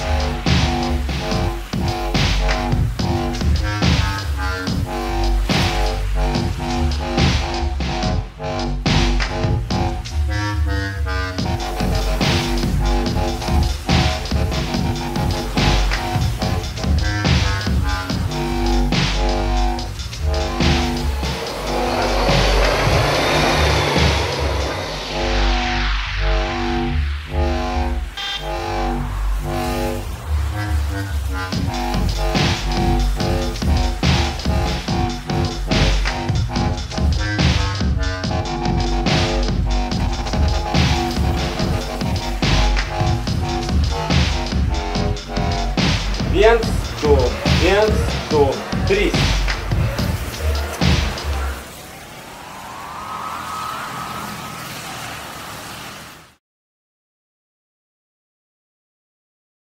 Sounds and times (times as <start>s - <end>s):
Music: 0.0s - 51.7s.